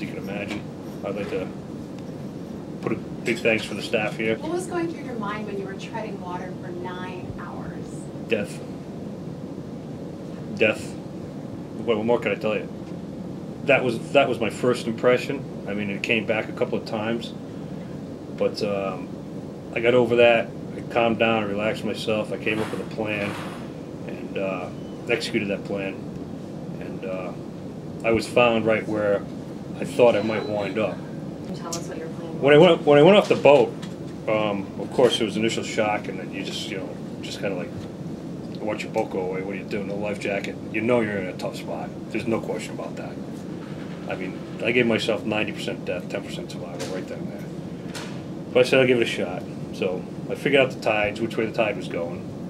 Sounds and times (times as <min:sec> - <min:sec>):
Speech: 0:00.0 - 0:01.6, 0:02.8 - 0:08.6, 0:10.5 - 0:11.0, 0:11.8 - 0:12.7, 0:13.7 - 0:17.4, 0:18.4 - 0:19.1, 0:19.8 - 0:23.5, 0:24.1 - 0:26.0, 0:26.8 - 0:27.4, 0:28.0 - 0:29.2, 0:29.8 - 0:33.7, 0:34.3 - 0:37.7, 0:38.6 - 0:43.2, 0:44.1 - 0:47.5, 0:48.6 - 0:52.2.